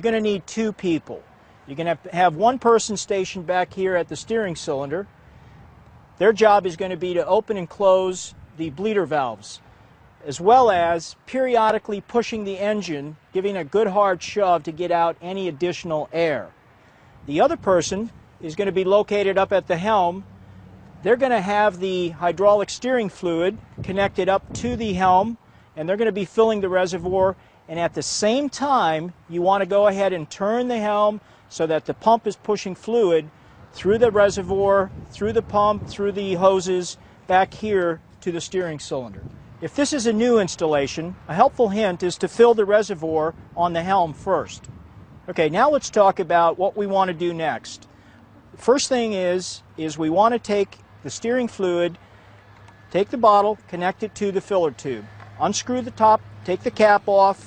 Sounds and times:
Speech: 0:00.0 - 0:05.1, 0:06.2 - 0:09.6, 0:10.2 - 0:16.5, 0:17.3 - 0:20.2, 0:21.0 - 0:44.7, 0:45.3 - 0:47.9, 0:48.6 - 0:52.0, 0:52.9 - 0:57.4.

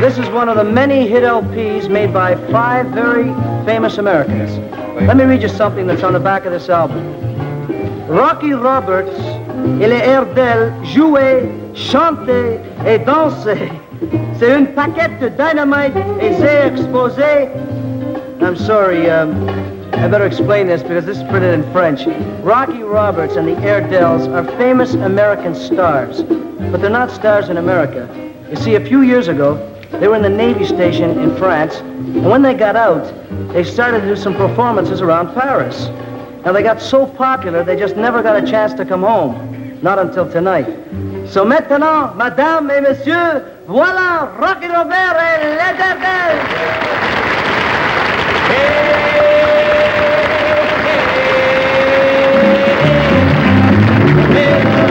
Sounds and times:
Speech: 0:00.0 - 0:07.0, 0:08.1 - 0:13.8, 0:14.4 - 0:17.6, 0:18.4 - 0:19.4, 0:20.0 - 0:46.5
Music: 0:00.0 - 0:54.9.

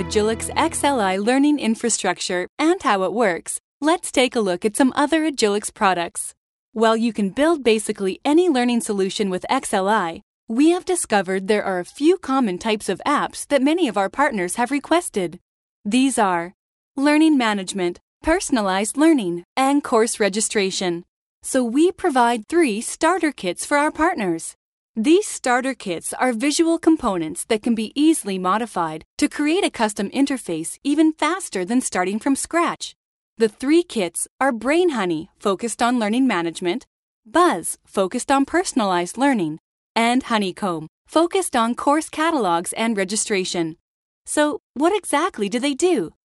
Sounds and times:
Speech: 0:00.0 - 0:46.2.

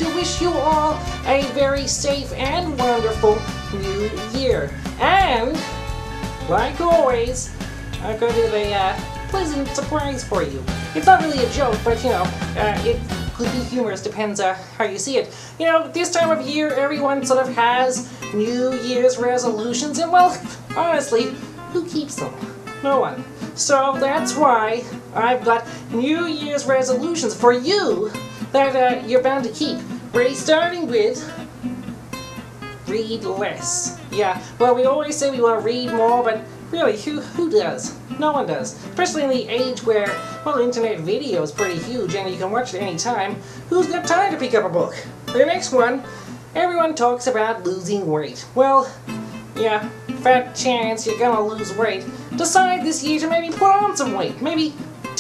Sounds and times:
Speech: 0:00.0 - 0:05.7, 0:06.5 - 0:31.3, 0:32.8 - 0:49.0, 0:49.6 - 0:55.2
Music: 0:00.0 - 0:55.2.

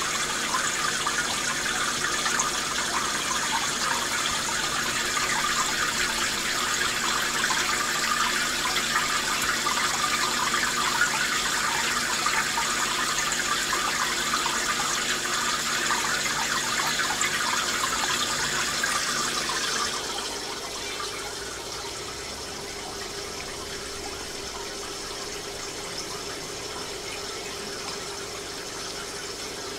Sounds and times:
Fill (with liquid): 0:00.0 - 0:29.7.

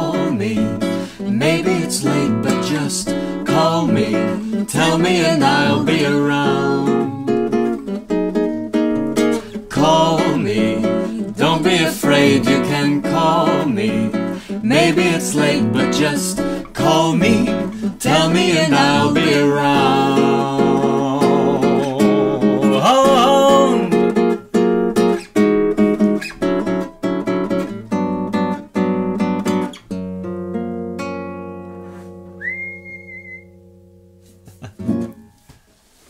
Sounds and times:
Acoustic guitar: 0:00.0 - 0:36.1.

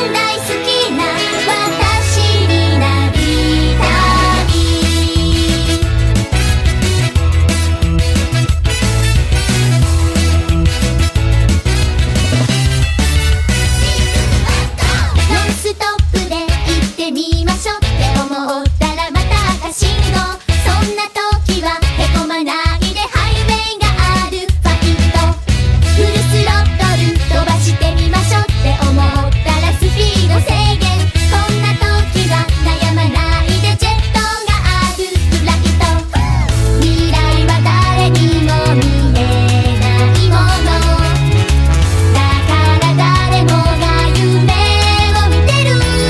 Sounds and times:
Music for children: 0:00.0 - 0:46.1.

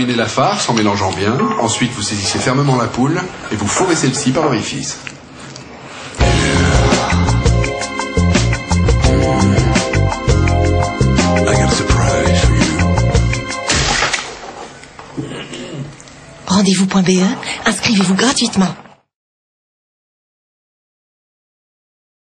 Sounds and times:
Speech: 0:00.0 - 0:05.0, 0:16.5 - 0:18.8
Music: 0:06.2 - 0:13.9.

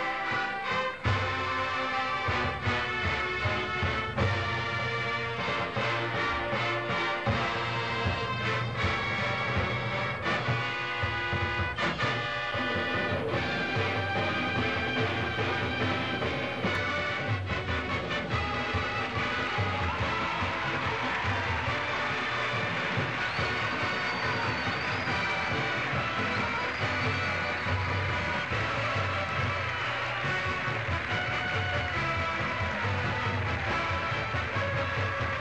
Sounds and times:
Drum roll: 0:02.2 - 0:35.4.

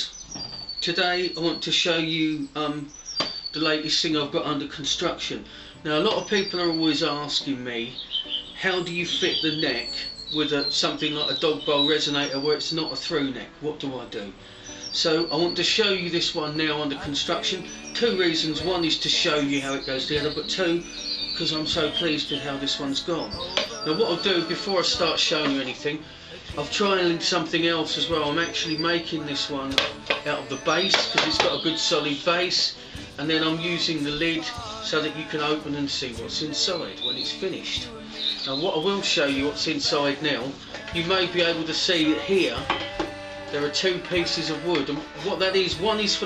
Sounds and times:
Speech: 0:00.8 - 0:02.9, 0:03.6 - 0:08.0, 0:08.6 - 0:14.4, 0:15.0 - 0:42.7, 0:43.5 - 0:46.2
Plucked string instrument: 0:16.4 - 0:46.2.

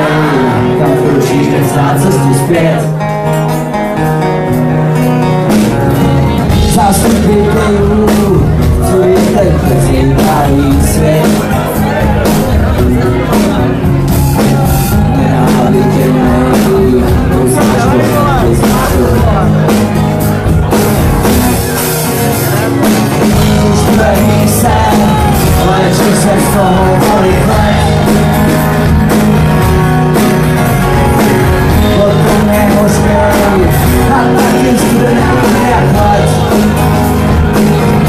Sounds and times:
Music: 0:00.0 - 0:38.0
Speech: 0:06.6 - 0:14.0, 0:15.1 - 0:19.9.

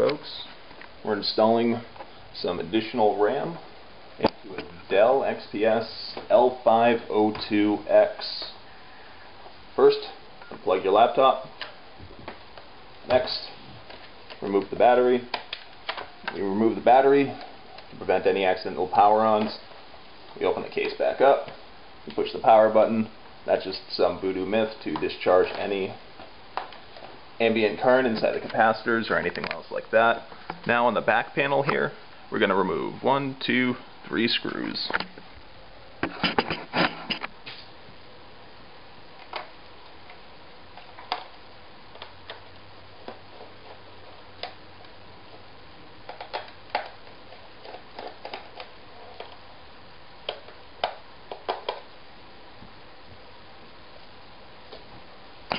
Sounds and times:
Speech: 0:00.0 - 0:08.6, 0:09.8 - 0:11.6, 0:13.1 - 0:13.6, 0:14.4 - 0:15.4, 0:16.3 - 0:19.7, 0:20.4 - 0:26.0, 0:27.4 - 0:35.0.

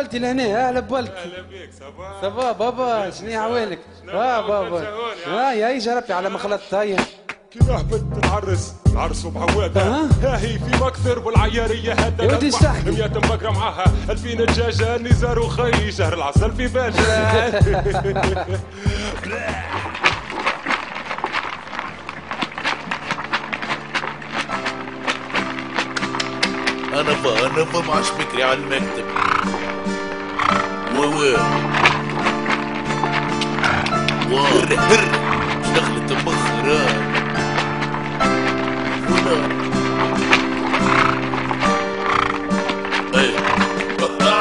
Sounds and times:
Speech: 0:00.0 - 0:08.0, 0:12.0 - 0:13.7, 0:27.0 - 0:29.1, 0:30.9 - 0:31.5, 0:35.8 - 0:37.0, 0:43.2 - 0:43.5
Music: 0:00.0 - 0:44.4.

